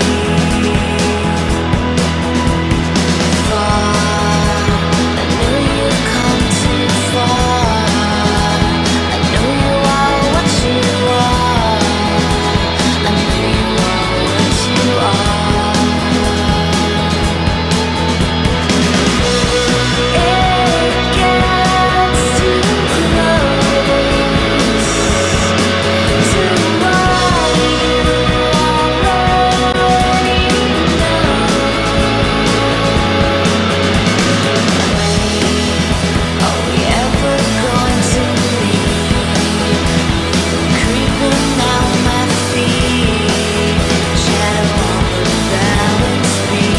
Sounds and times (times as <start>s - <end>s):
Music: 0.0s - 46.7s.